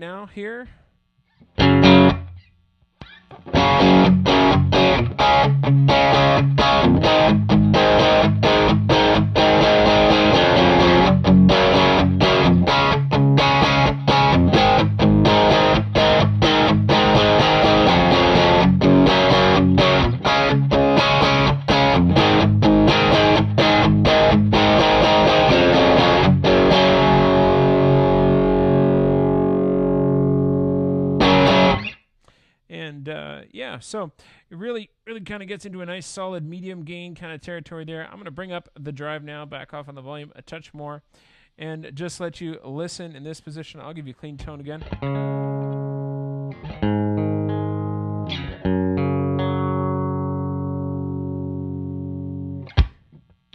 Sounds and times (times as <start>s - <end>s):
Speech: 0.0s - 0.9s, 32.7s - 44.9s
Distortion: 0.0s - 53.5s
Inside, small room: 0.0s - 53.5s
Guitar: 1.3s - 32.1s, 44.4s - 53.5s
Effects unit: 1.3s - 32.2s, 44.8s - 53.5s.